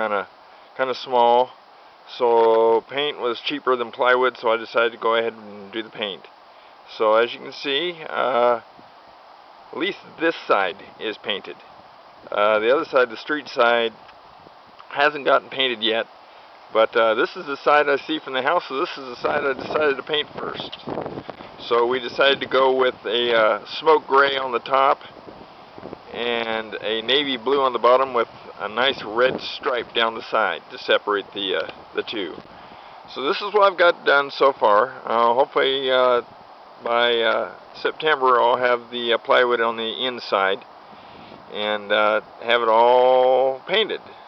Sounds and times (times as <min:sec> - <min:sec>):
Speech: 0:00.0 - 0:06.3, 0:06.9 - 0:08.6, 0:09.8 - 0:11.6, 0:12.3 - 0:14.0, 0:14.9 - 0:16.1, 0:16.8 - 0:20.8, 0:21.6 - 0:25.1, 0:26.1 - 0:32.4, 0:33.1 - 0:40.6, 0:41.5 - 0:44.1.